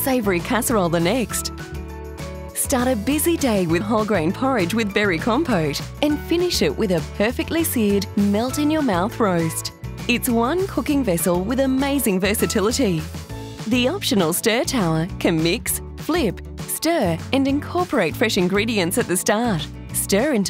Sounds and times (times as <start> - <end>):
Speech: 0.0 - 1.5, 2.6 - 13.1, 13.7 - 20.4
Music: 0.0 - 20.4.